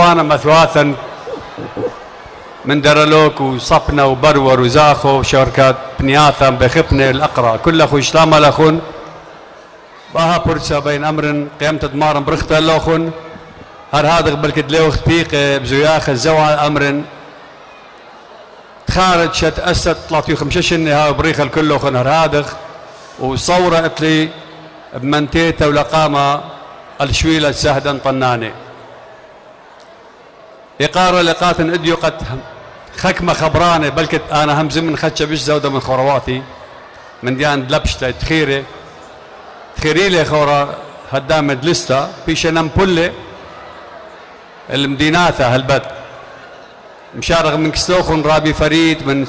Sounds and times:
Male speech, man speaking: 0.0s - 1.9s, 2.6s - 8.9s, 10.1s - 13.2s, 13.9s - 17.1s, 18.9s - 22.6s, 23.2s - 24.4s, 25.0s - 28.6s, 30.8s - 32.4s, 33.0s - 36.5s, 37.2s - 38.7s, 39.8s - 43.2s, 44.7s - 46.0s, 47.2s - 49.2s.

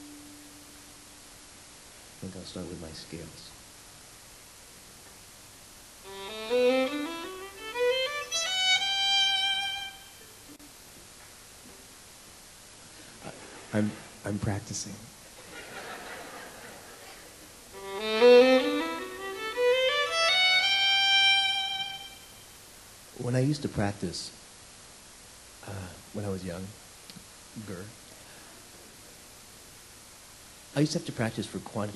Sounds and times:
Violin, fiddle: 6.1s - 10.3s, 17.8s - 22.3s.

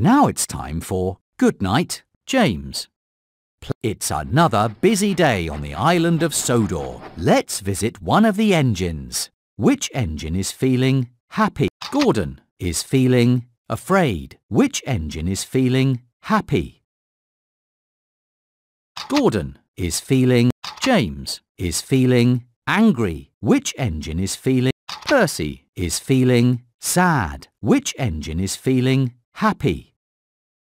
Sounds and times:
Speech: 0.0s - 3.0s, 3.6s - 16.8s, 19.0s - 30.0s.

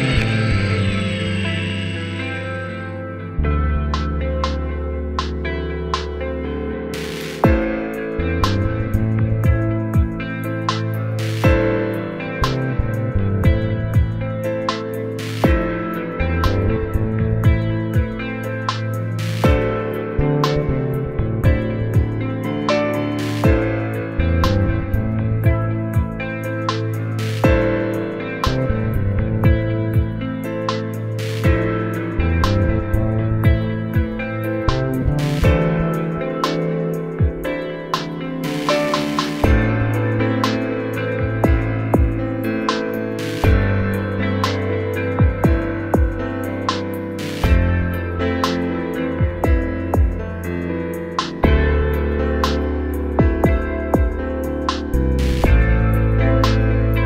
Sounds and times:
Music: 0.0s - 57.0s.

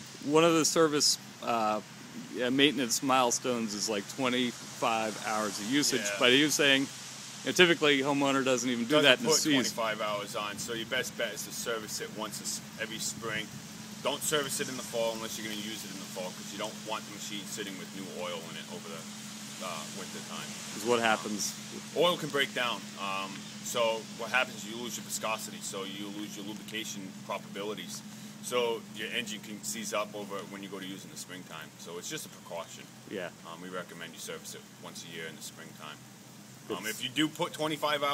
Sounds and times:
Speech: 0.2s - 6.9s, 7.5s - 13.5s, 14.1s - 19.0s, 19.6s - 36.0s, 36.7s - 38.1s.

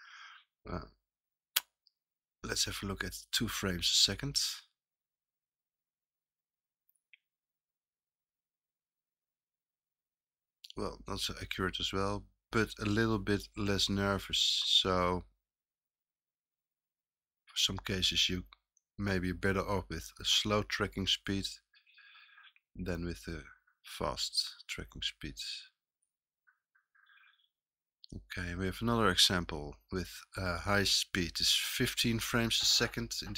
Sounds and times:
Inside, small room: 0.0s - 9.9s, 10.6s - 15.5s, 17.0s - 33.3s
Speech: 0.7s - 1.0s, 2.4s - 4.8s, 10.7s - 15.3s, 17.5s - 21.6s, 22.8s - 25.8s, 28.1s - 33.3s.

